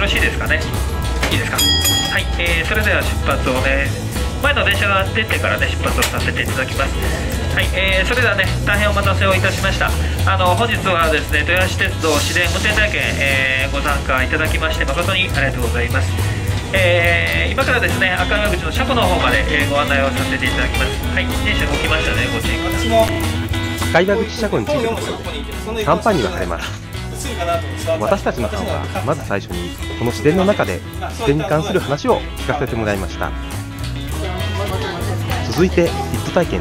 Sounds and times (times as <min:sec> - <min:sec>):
Music: 0:00.0 - 0:36.6
Speech: 0:01.3 - 0:16.0, 0:16.7 - 0:23.2, 0:23.9 - 0:33.4, 0:34.2 - 0:36.6.